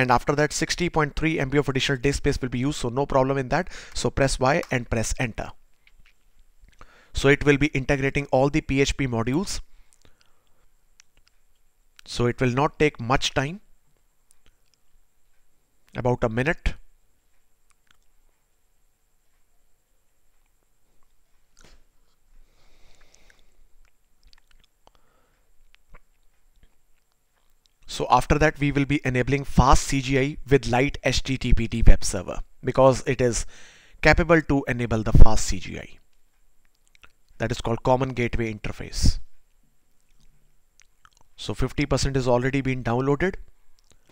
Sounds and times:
Speech: 0:00.0 - 0:05.6, 0:07.2 - 0:09.7, 0:12.0 - 0:13.6, 0:15.9 - 0:16.9, 0:27.9 - 0:36.0, 0:37.4 - 0:39.3, 0:41.4 - 0:43.4.

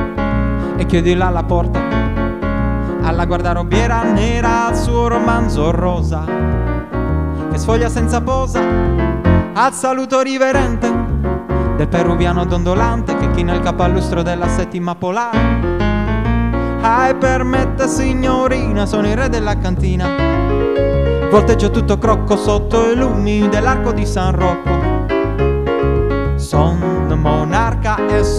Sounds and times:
Music: 0:00.0 - 0:28.3.

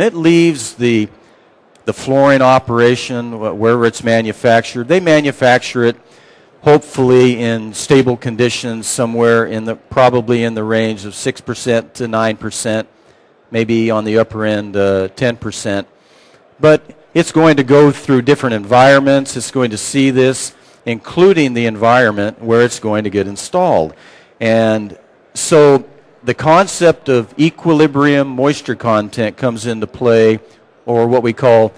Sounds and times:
Speech: 0:00.0 - 0:01.2, 0:01.8 - 0:06.0, 0:06.6 - 0:12.9, 0:13.5 - 0:15.9, 0:16.6 - 0:31.7.

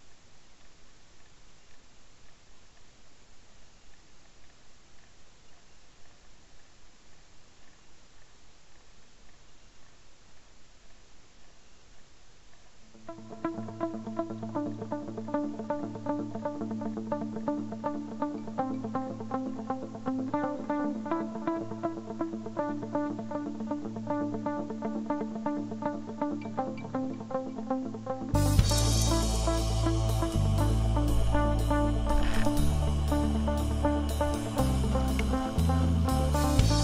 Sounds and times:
Music: 0:12.9 - 0:36.8.

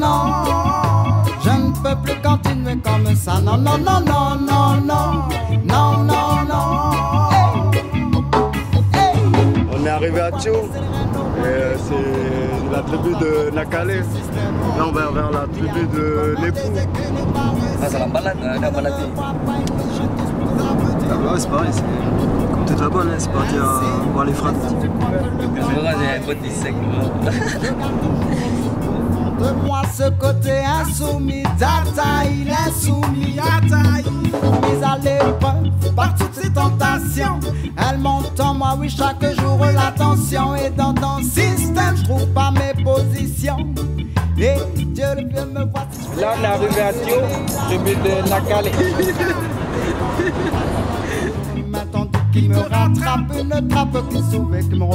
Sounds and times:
Music: 0:00.0 - 0:54.9
Speech: 0:11.4 - 0:14.1, 0:22.7 - 0:27.1, 0:46.1 - 0:49.3.

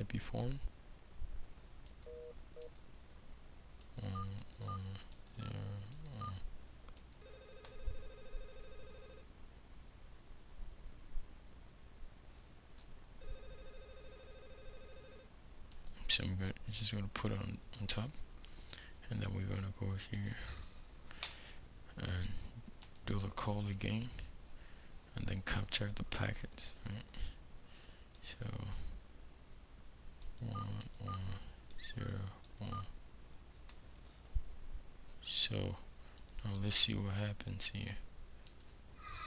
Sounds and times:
Clicking: 0:01.8 - 0:02.9, 0:05.2 - 0:05.4, 0:06.9 - 0:07.2, 0:15.7 - 0:16.0, 0:30.2 - 0:30.4, 0:36.2 - 0:36.4, 0:38.4 - 0:38.8.

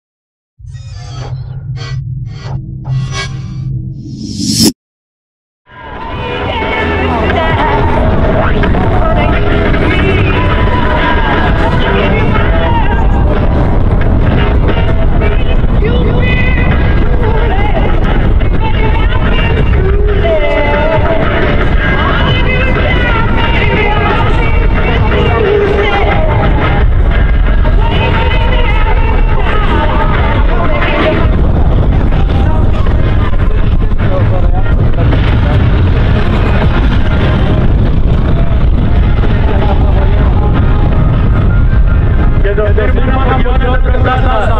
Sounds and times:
Aircraft: 0:05.7 - 0:44.5
Music: 0:05.7 - 0:44.5.

